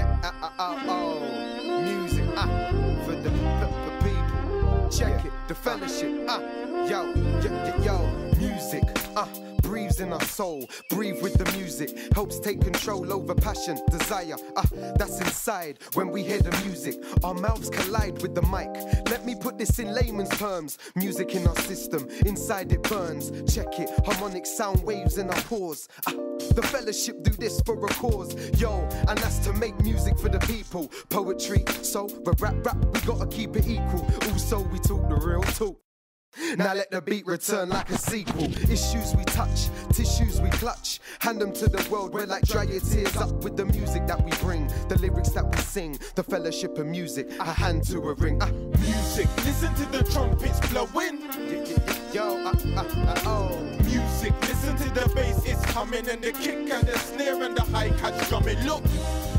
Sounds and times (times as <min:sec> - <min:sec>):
Music: 0:00.0 - 0:35.8, 0:37.8 - 0:59.3.